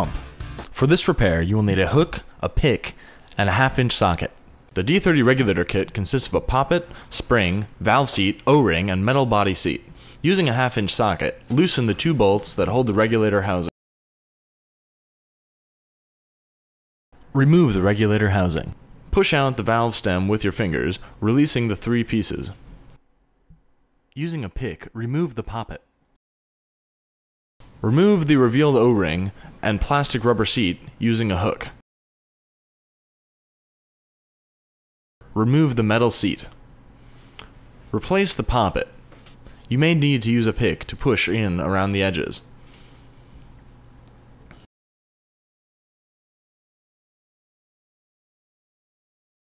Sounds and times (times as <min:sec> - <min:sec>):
Speech: 0:00.0 - 0:13.7, 0:17.2 - 0:22.6, 0:24.2 - 0:25.9, 0:27.8 - 0:31.8, 0:35.3 - 0:36.6, 0:37.9 - 0:39.0, 0:39.7 - 0:42.5.